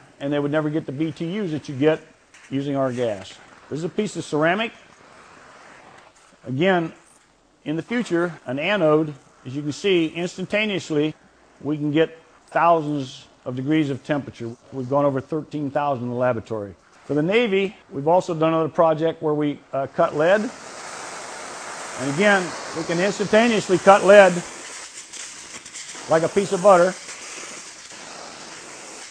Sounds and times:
Speech: 0.2s - 4.8s, 6.4s - 7.0s, 7.7s - 20.5s, 22.0s - 24.5s, 26.1s - 27.0s.

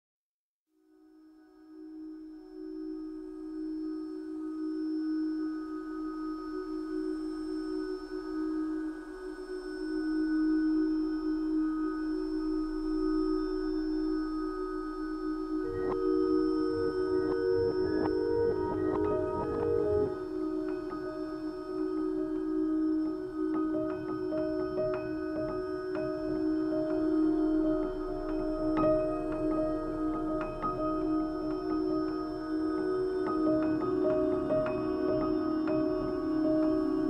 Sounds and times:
Singing bowl: 0.8s - 37.0s.

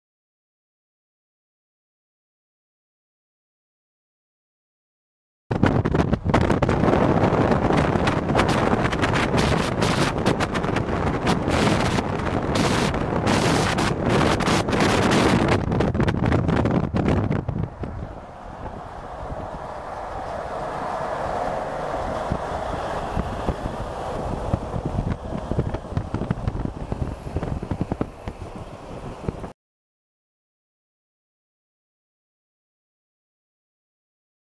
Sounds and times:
Truck: 5.6s - 29.6s.

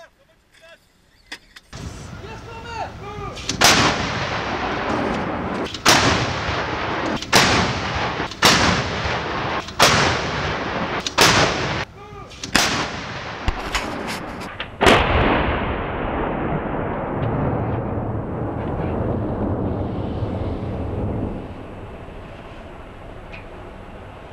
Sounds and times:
Artillery fire: 3.4s - 22.0s.

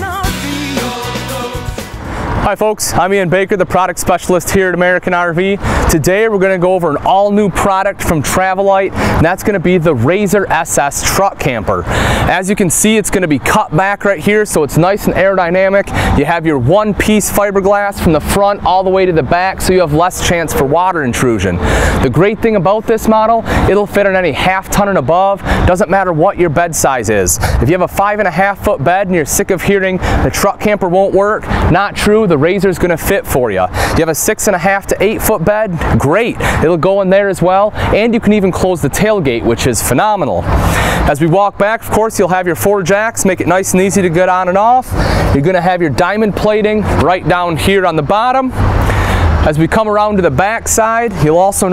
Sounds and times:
Speech: 2.4s - 48.6s, 49.4s - 51.7s.

